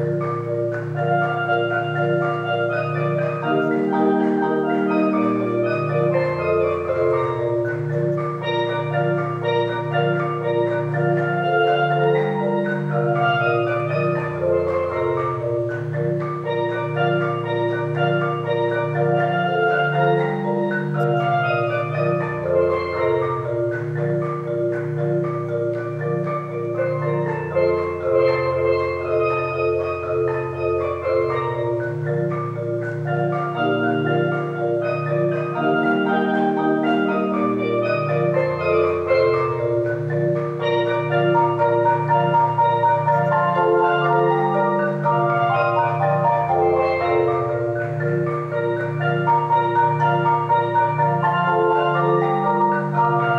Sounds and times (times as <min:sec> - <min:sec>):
Music: 0:00.0 - 0:53.3.